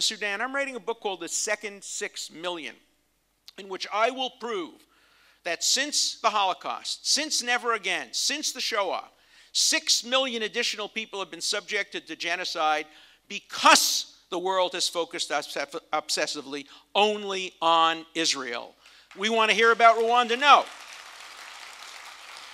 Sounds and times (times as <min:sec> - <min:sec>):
Male speech, man speaking: 0:00.0 - 0:02.8, 0:03.5 - 0:04.8, 0:05.5 - 0:20.7.